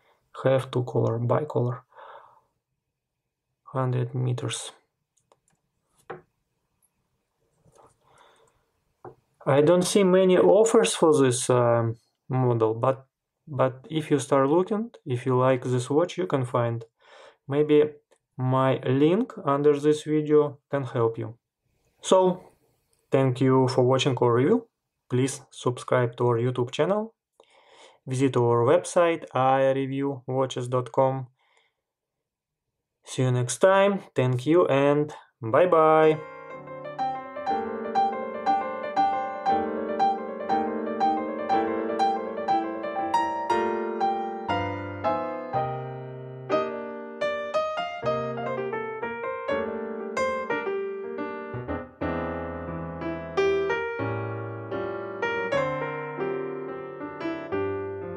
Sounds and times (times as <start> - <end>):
Inside, small room: 0.0 - 58.1
Speech: 0.4 - 1.9, 3.7 - 4.8, 9.4 - 16.9, 17.5 - 21.4, 22.0 - 22.5, 23.2 - 27.2, 28.1 - 31.3, 33.1 - 36.2.